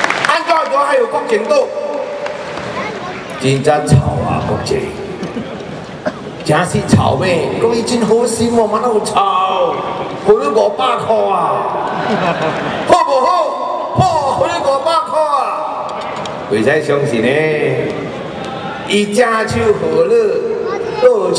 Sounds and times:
Narration, monologue: 0:00.1 - 0:12.0, 0:12.8 - 0:18.3, 0:18.9 - 0:21.3
Male speech, man speaking: 0:00.2 - 0:01.9, 0:03.4 - 0:05.1, 0:06.4 - 0:11.8, 0:12.9 - 0:15.8, 0:16.5 - 0:17.9, 0:18.9 - 0:21.3.

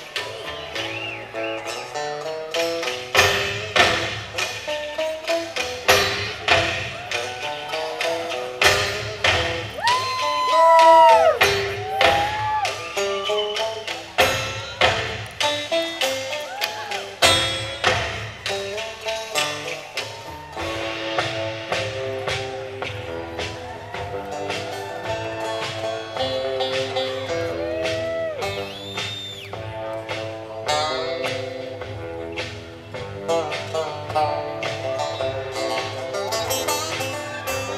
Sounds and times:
Music: 0:00.0 - 0:37.7.

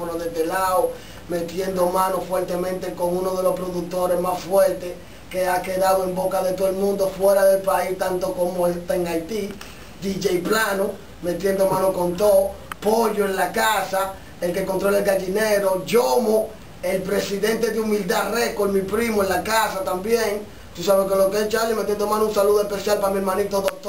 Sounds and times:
Speech: 0:00.0 - 0:23.8.

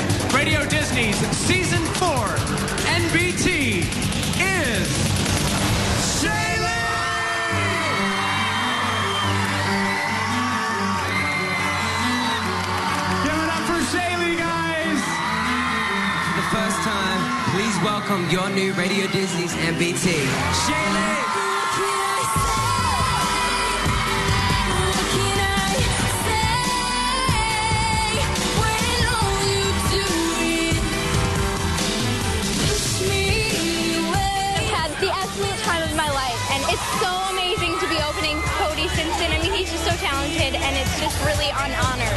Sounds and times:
Music: 0:00.0 - 0:42.1.

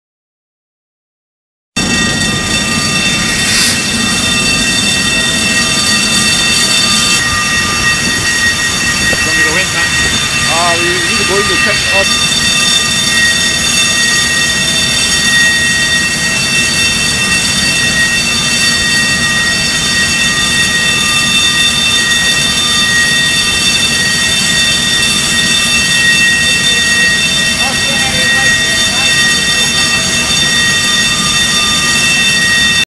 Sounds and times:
Speech: 0:09.2 - 0:12.1, 0:26.5 - 0:30.5.

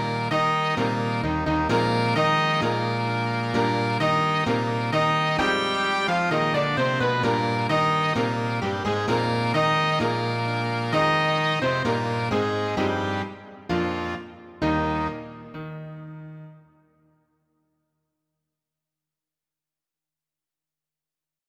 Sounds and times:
Musical instrument: 0:00.0 - 0:17.0.

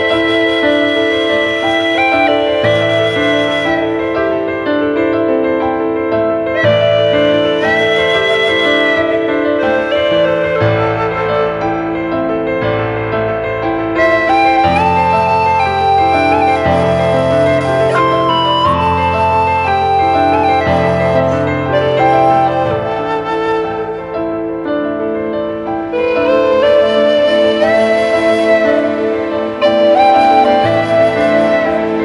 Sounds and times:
Music: 0:00.0 - 0:32.0.

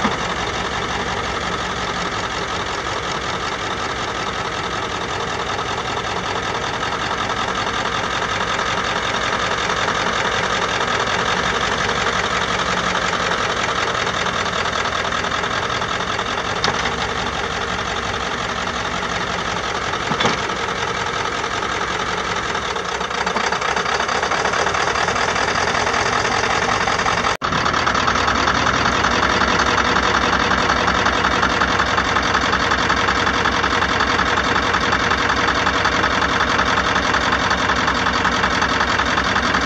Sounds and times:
Vehicle: 0:00.0 - 0:39.6.

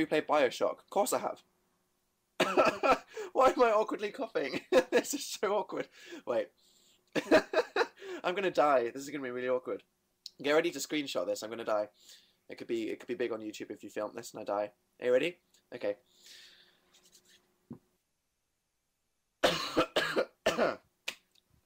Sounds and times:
Speech: 0:00.0 - 0:01.4, 0:03.4 - 0:06.5, 0:08.2 - 0:11.9, 0:12.5 - 0:16.0.

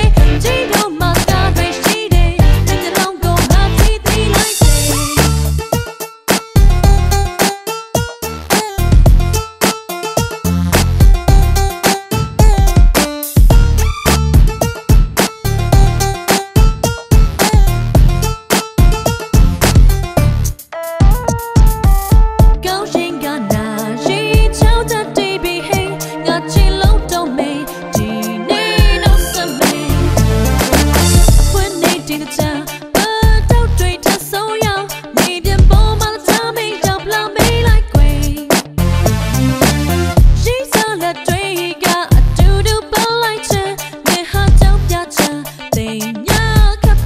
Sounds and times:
Music: 0:00.0 - 0:47.0.

